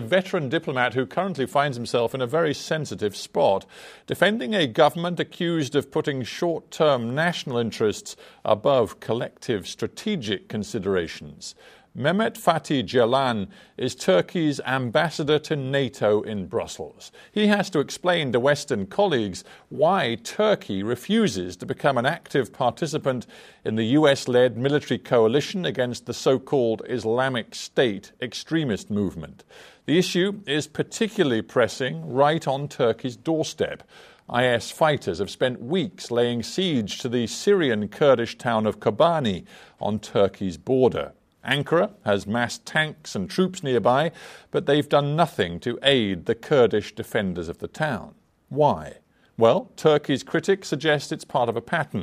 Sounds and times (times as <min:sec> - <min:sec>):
Speech: 0:00.0 - 0:52.0.